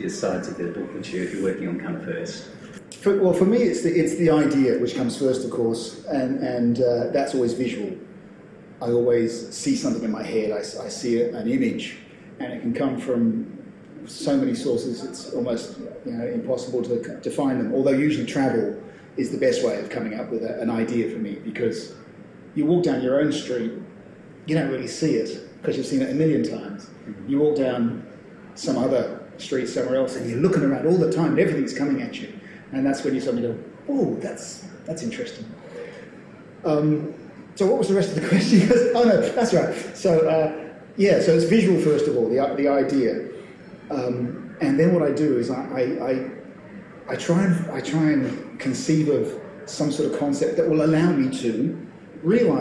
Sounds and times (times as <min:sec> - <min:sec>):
Speech: 0:00.0 - 0:08.1, 0:08.8 - 0:52.6.